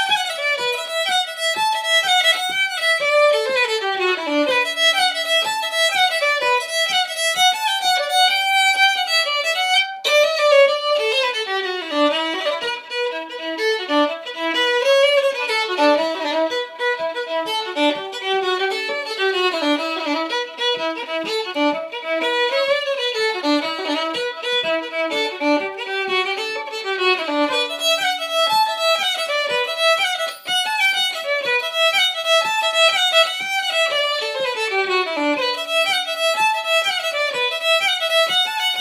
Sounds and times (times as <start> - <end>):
Violin, fiddle: 0.0 - 38.8.